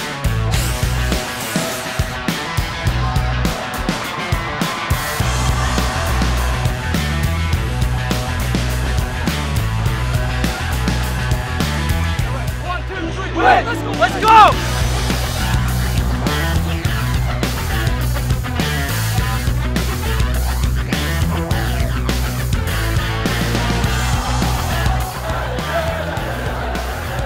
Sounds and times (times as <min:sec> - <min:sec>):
Crowd: 0:00.0 - 0:27.2
Music: 0:00.0 - 0:27.2.